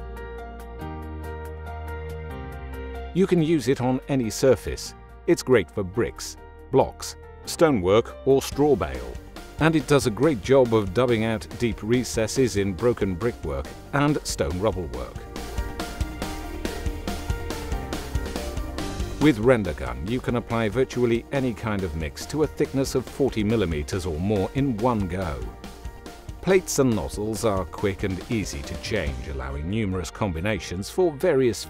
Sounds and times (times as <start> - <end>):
Music: 0.0 - 31.6
Speech: 3.2 - 15.2, 19.2 - 25.5, 26.4 - 31.6.